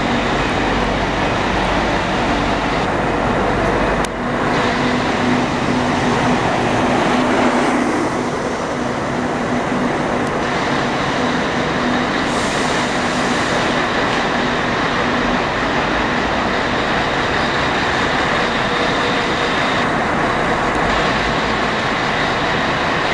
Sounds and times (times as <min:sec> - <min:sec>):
Bus: 0:00.0 - 0:23.1.